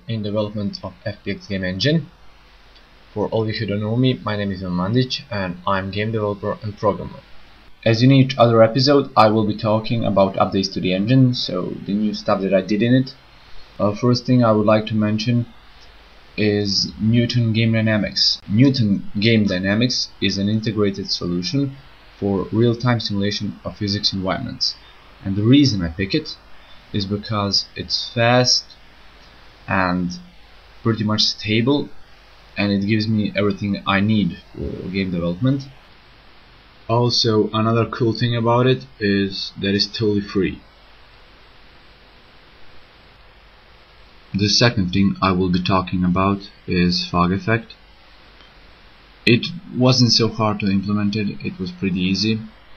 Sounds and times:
Speech: 0.0s - 2.1s, 3.1s - 13.2s, 13.8s - 15.6s, 16.4s - 28.8s, 29.7s - 32.0s, 32.6s - 35.8s, 36.9s - 40.7s, 44.3s - 47.8s, 49.3s - 52.6s.

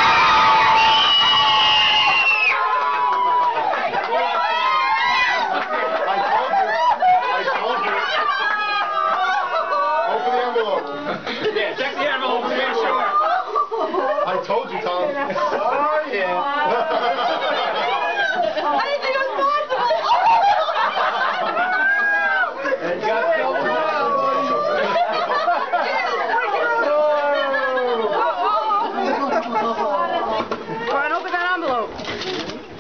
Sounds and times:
Snicker: 16.6s - 22.8s, 24.0s - 30.4s.

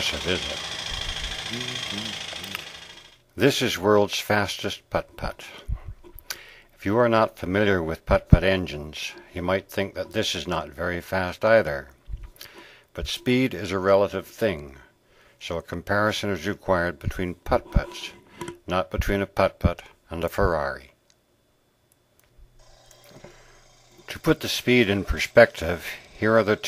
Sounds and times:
Speech: 0.0s - 0.6s, 1.5s - 2.6s, 3.4s - 5.6s, 6.8s - 11.9s, 13.0s - 21.0s, 24.1s - 26.6s.

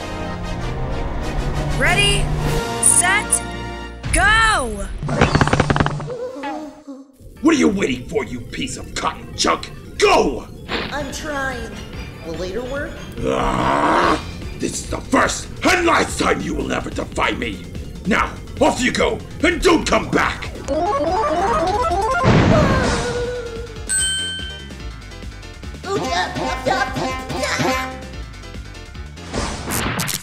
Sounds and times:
Music: 0.0s - 4.6s, 10.6s - 30.2s.

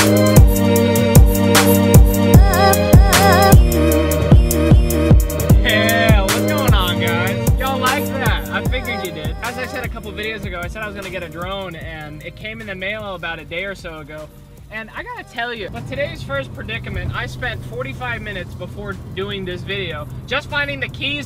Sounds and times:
Car: 0.0s - 21.2s
Music: 0.0s - 21.2s
Speech: 5.7s - 21.2s.

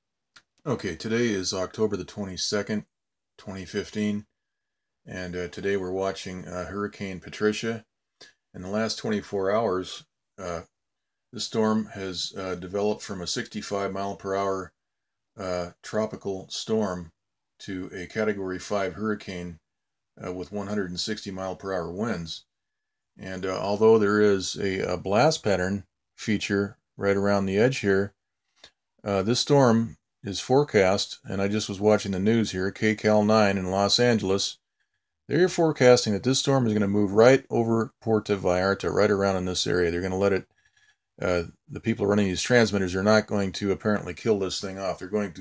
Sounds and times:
Speech: 0.6s - 4.3s, 5.1s - 7.9s, 8.5s - 10.7s, 11.4s - 14.8s, 15.4s - 19.6s, 20.2s - 22.5s, 23.2s - 28.2s, 29.0s - 34.6s, 35.3s - 40.5s, 41.2s - 45.4s.

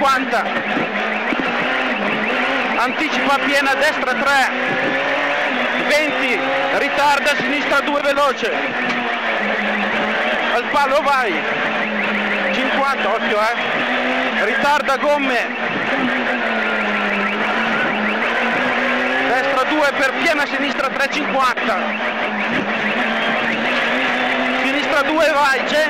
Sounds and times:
Speech: 0.0s - 0.5s, 2.8s - 4.6s, 5.8s - 8.6s, 10.5s - 11.4s, 12.5s - 13.6s, 14.4s - 15.6s, 19.3s - 21.8s, 24.6s - 25.9s
Car: 0.0s - 25.9s.

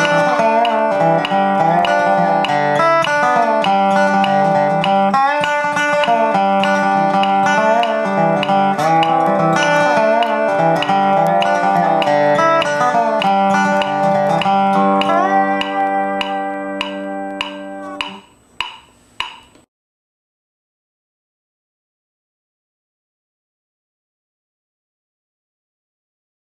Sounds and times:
Guitar: 0.0s - 18.3s.

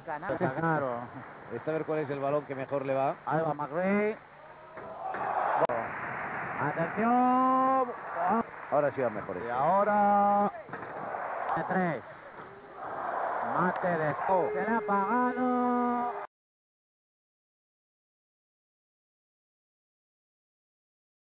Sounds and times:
Speech: 13.5s - 16.3s.

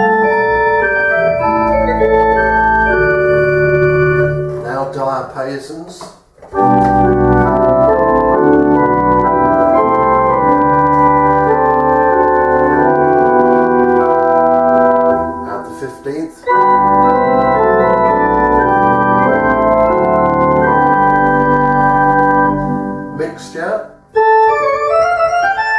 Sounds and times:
Organ: 0.0s - 25.7s
Piano: 0.0s - 25.7s
Speech: 4.6s - 6.2s, 15.4s - 16.5s, 23.2s - 25.0s.

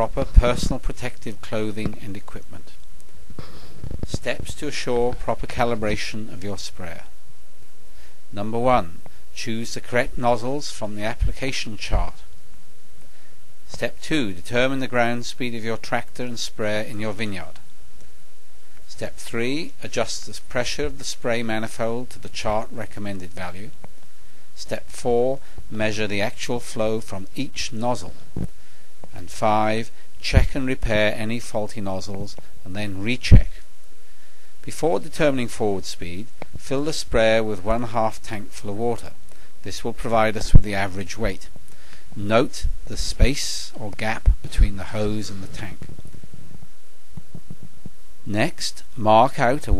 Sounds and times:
Speech: 0.0s - 2.8s, 4.0s - 7.2s, 8.3s - 12.3s, 13.7s - 17.6s, 18.9s - 23.8s, 24.6s - 28.2s, 29.1s - 33.6s, 34.6s - 41.5s, 42.2s - 45.9s, 48.3s - 49.7s.

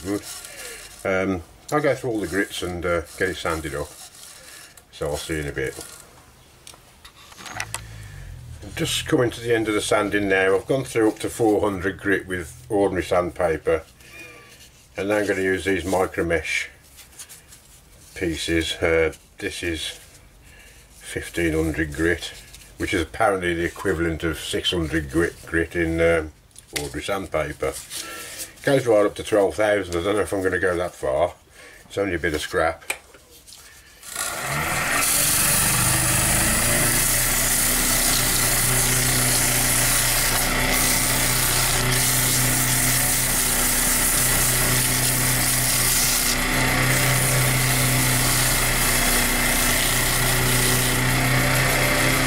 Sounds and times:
Inside, small room: 0.0s - 52.2s
Speech: 1.0s - 4.0s, 4.9s - 5.8s, 8.6s - 13.9s, 15.0s - 16.8s, 18.2s - 20.0s, 21.0s - 27.8s, 28.6s - 32.9s.

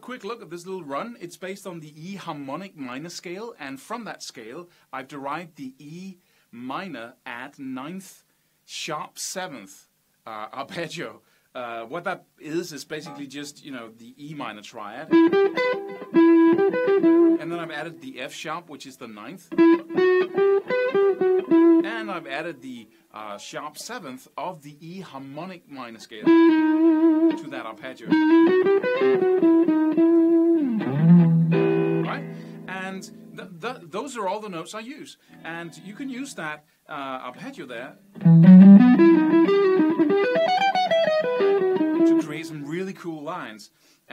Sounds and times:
Speech: 0.0s - 15.1s, 17.4s - 19.5s, 21.8s - 26.3s, 27.3s - 28.2s, 32.1s - 38.0s, 42.1s - 44.1s.

